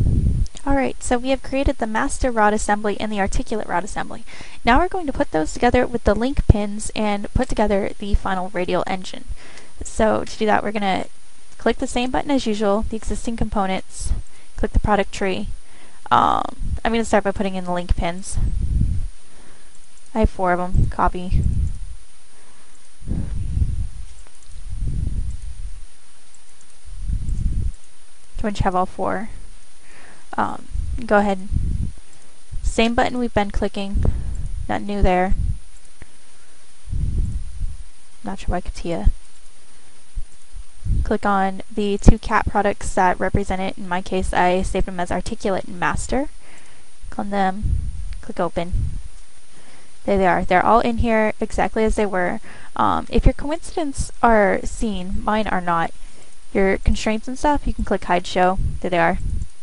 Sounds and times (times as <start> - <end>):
Speech: 0.5 - 15.5, 16.1 - 18.5, 20.1 - 21.4, 28.4 - 29.4, 30.4 - 31.5, 32.6 - 34.1, 34.7 - 35.4, 38.2 - 39.1, 41.0 - 46.3, 47.1 - 47.6, 48.2 - 48.8, 50.0 - 55.9, 56.6 - 59.2.